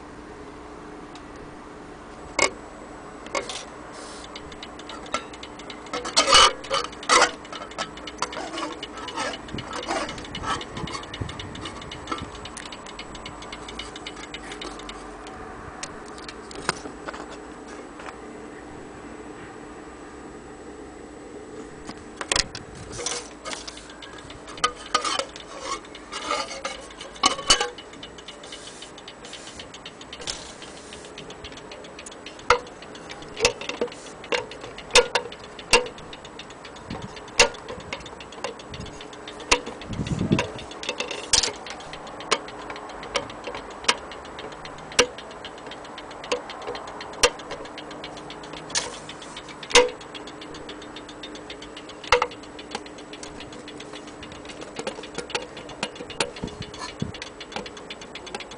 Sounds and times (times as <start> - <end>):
Tick-tock: 3.2 - 17.3, 21.9 - 58.5
Tick: 4.2 - 17.3, 21.9 - 58.5.